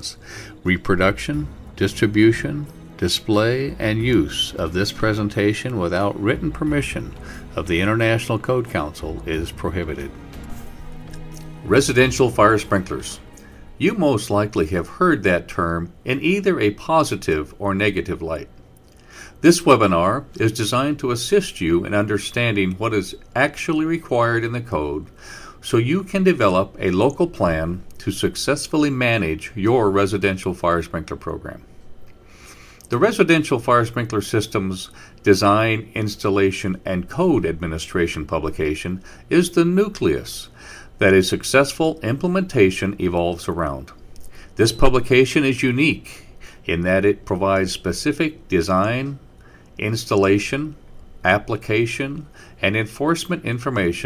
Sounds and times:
Speech: 0.0s - 10.2s, 11.6s - 18.5s, 19.4s - 31.6s, 32.9s - 44.0s, 44.6s - 49.2s, 49.8s - 54.0s.

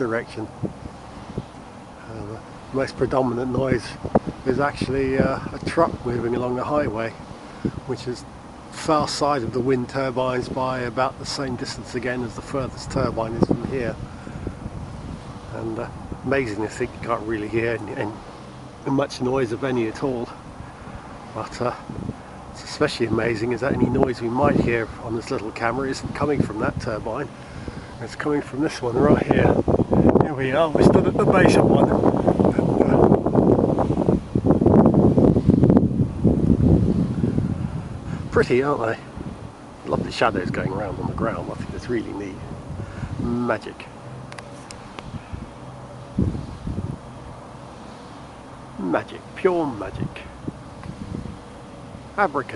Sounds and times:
Wind noise (microphone): 0.0s - 8.1s, 8.7s - 18.3s, 18.9s - 43.6s, 44.3s - 47.2s, 49.7s - 51.5s.

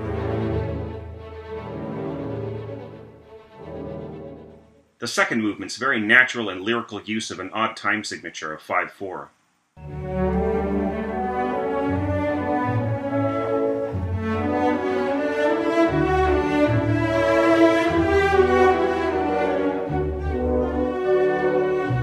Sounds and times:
Cello: 0.0s - 4.8s, 9.8s - 22.0s
Classical music: 0.0s - 5.0s, 9.8s - 22.0s
Orchestra: 0.0s - 5.0s, 9.8s - 22.0s.

